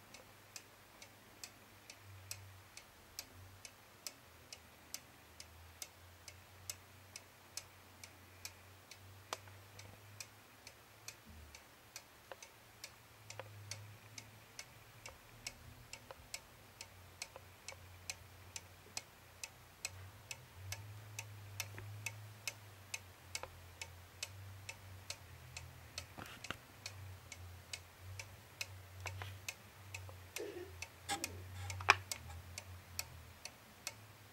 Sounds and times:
Tick-tock: 0:00.0 - 0:34.3
Tick: 0:10.2 - 0:14.3, 0:15.0 - 0:18.2, 0:19.8 - 0:24.4.

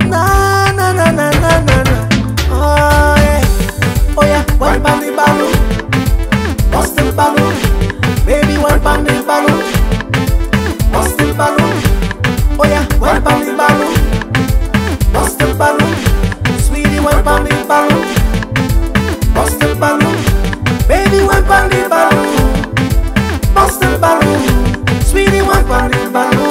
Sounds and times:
Music: 0:00.0 - 0:26.5.

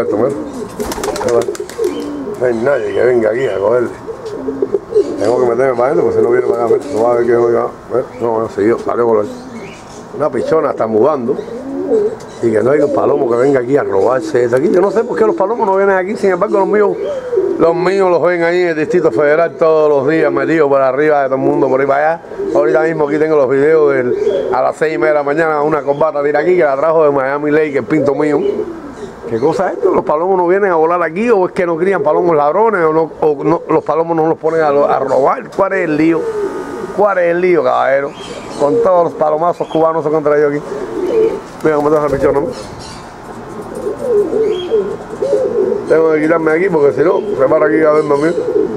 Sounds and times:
Speech: 0:00.0 - 0:00.4, 0:01.2 - 0:01.6, 0:02.4 - 0:04.0, 0:05.2 - 0:09.4, 0:10.2 - 0:11.4, 0:12.4 - 0:17.0, 0:17.6 - 0:28.5, 0:29.3 - 0:36.2, 0:37.0 - 0:40.6, 0:41.6 - 0:42.6, 0:45.9 - 0:48.5
Pigeon, dove: 0:00.0 - 0:20.6, 0:21.4 - 0:30.6, 0:33.3 - 0:48.7.

